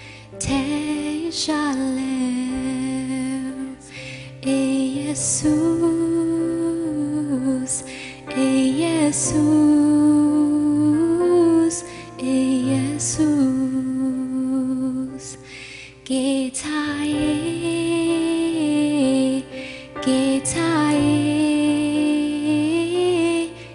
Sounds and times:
Music: 0.0s - 23.7s.

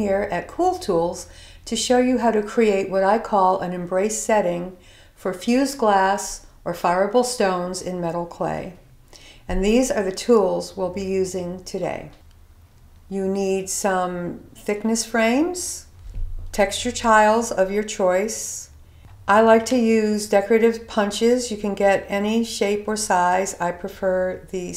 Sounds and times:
Speech: 0.0s - 8.8s, 9.5s - 12.2s, 13.1s - 15.9s, 16.6s - 18.7s, 19.3s - 24.7s.

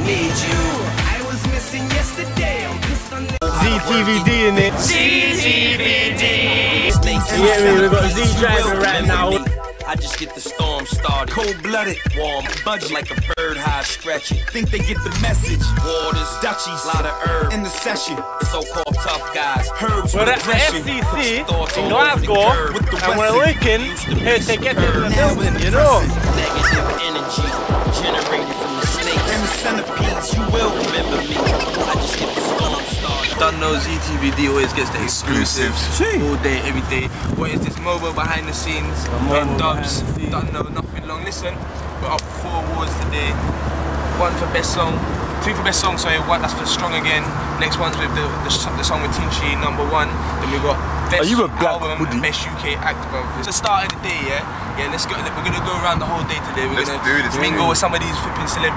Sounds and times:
Rhythm and blues: 0.0s - 36.1s.

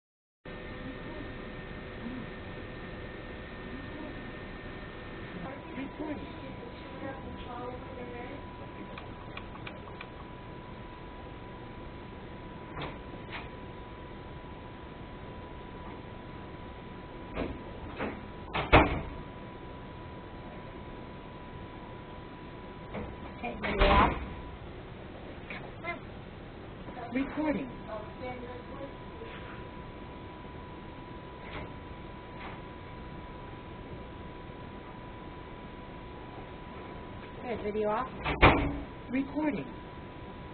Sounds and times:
Speech: 5.4s - 8.5s, 23.4s - 24.2s, 26.9s - 29.5s, 37.4s - 38.2s, 39.1s - 39.8s.

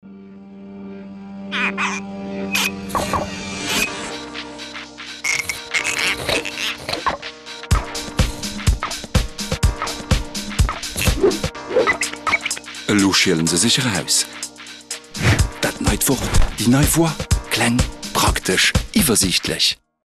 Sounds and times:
Music: 0.0s - 20.0s
Speech: 12.9s - 14.3s, 15.6s - 19.8s.

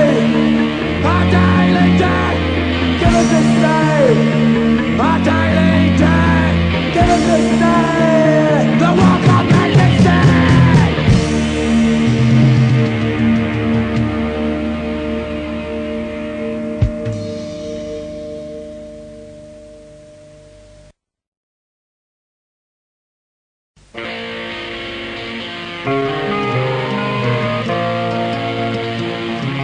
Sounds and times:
Punk rock: 0.0s - 18.7s
Heavy metal: 0.0s - 19.6s, 23.8s - 29.6s.

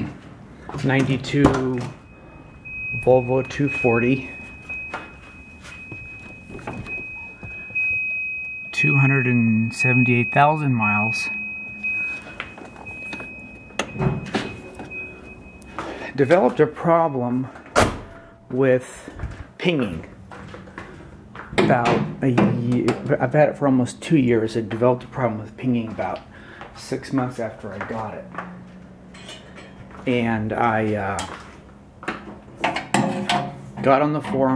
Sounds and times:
Speech: 0.8s - 1.9s, 3.0s - 4.3s, 8.8s - 11.3s, 16.2s - 17.5s, 18.5s - 20.1s, 21.6s - 26.2s, 26.8s - 28.3s, 30.0s - 31.3s, 33.8s - 34.5s.

